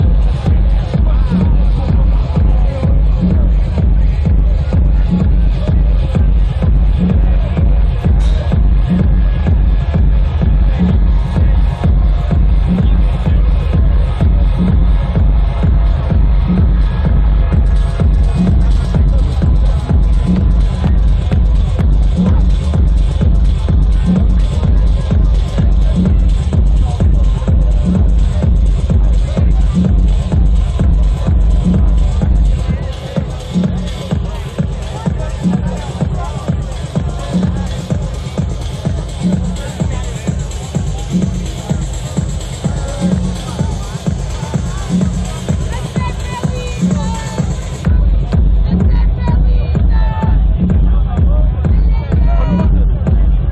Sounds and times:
Electronica: 0:00.0 - 0:53.5
Speech: 0:00.0 - 0:53.5.

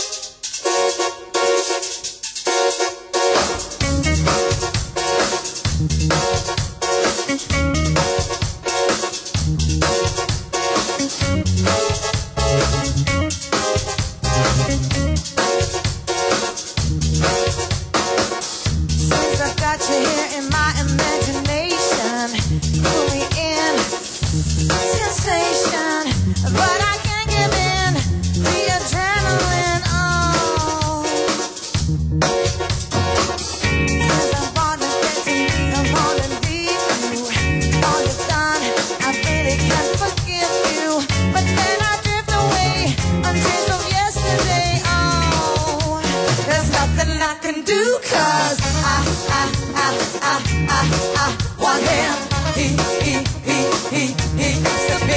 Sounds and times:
Music: 0:00.0 - 0:55.1.

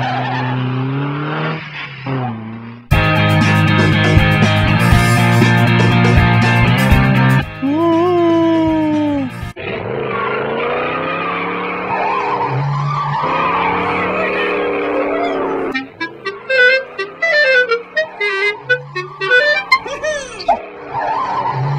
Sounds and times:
Wind instrument, woodwind instrument: 0:15.0 - 0:20.6.

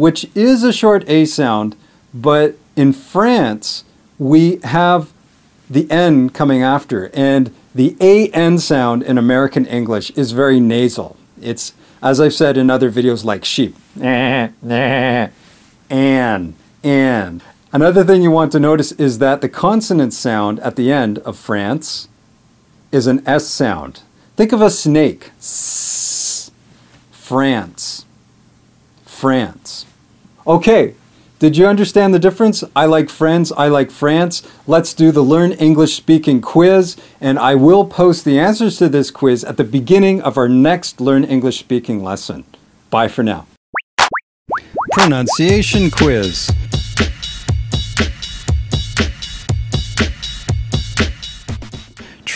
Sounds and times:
Speech: 0:00.0 - 0:22.1, 0:22.9 - 0:26.6, 0:27.2 - 0:28.1, 0:29.0 - 0:43.6, 0:45.0 - 0:46.6
Music: 0:45.4 - 0:52.2.

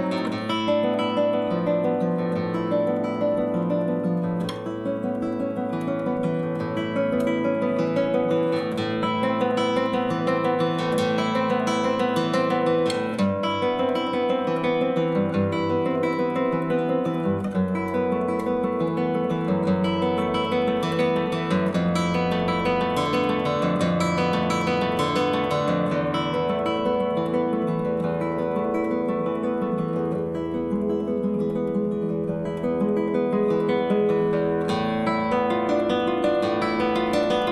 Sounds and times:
Acoustic guitar: 0:00.0 - 0:37.5.

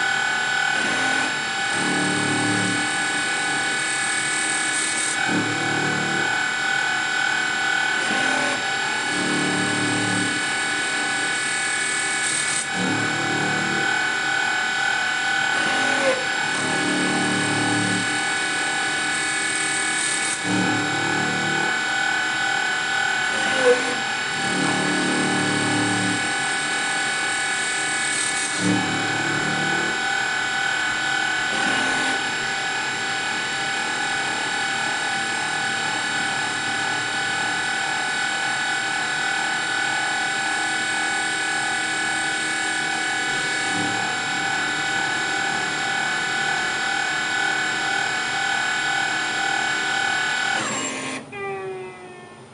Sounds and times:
Drill: 0:00.0 - 0:52.5.

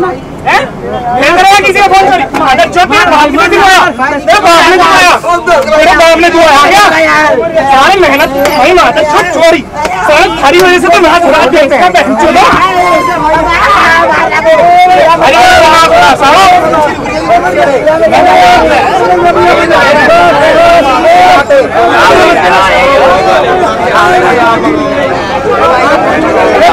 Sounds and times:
Bus: 0:00.0 - 0:26.7
Speech: 0:00.0 - 0:26.7.

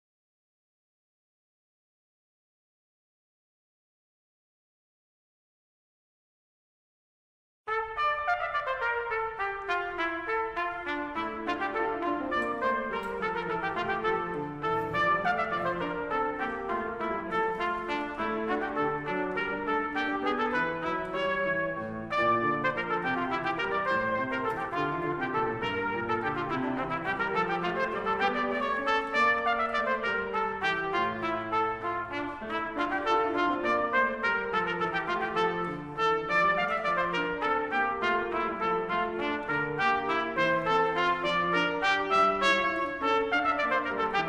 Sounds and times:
Music: 0:07.7 - 0:44.2.

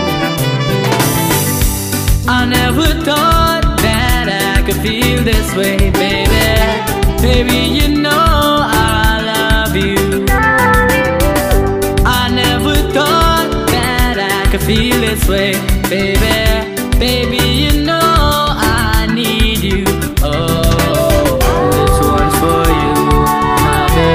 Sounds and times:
Music: 0:00.0 - 0:24.1.

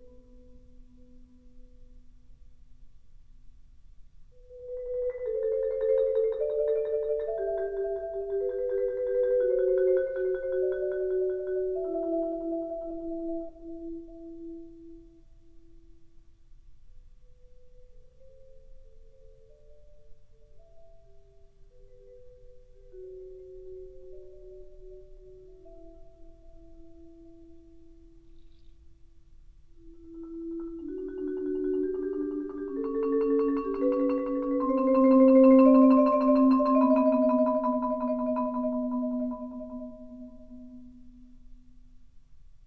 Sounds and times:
Vibraphone: 0:04.4 - 0:15.0, 0:17.3 - 0:28.4, 0:29.8 - 0:41.3.

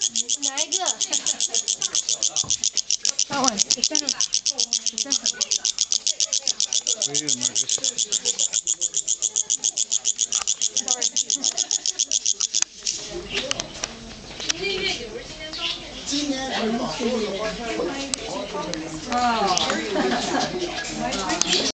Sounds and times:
Speech: 0:13.0 - 0:21.7.

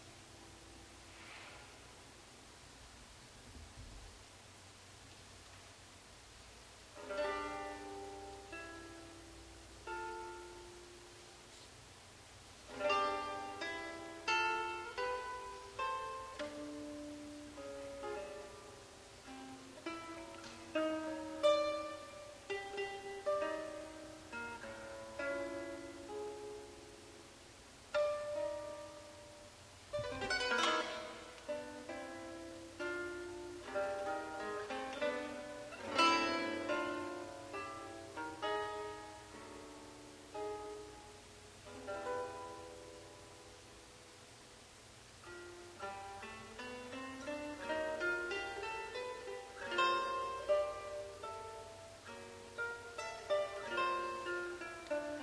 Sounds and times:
Music: 0:00.0 - 0:02.0, 0:06.9 - 0:11.8, 0:12.6 - 0:44.4, 0:45.2 - 0:55.2.

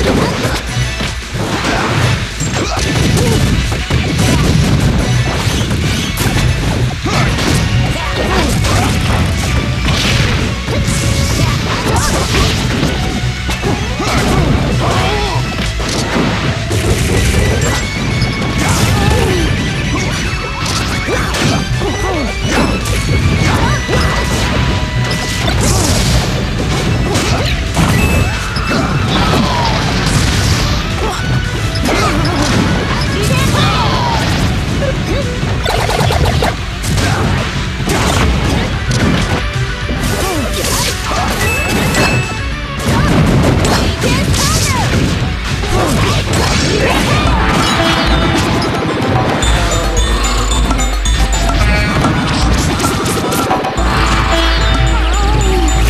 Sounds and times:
Music: 0:00.0 - 0:55.9
Smash, crash: 0:00.0 - 0:55.9.

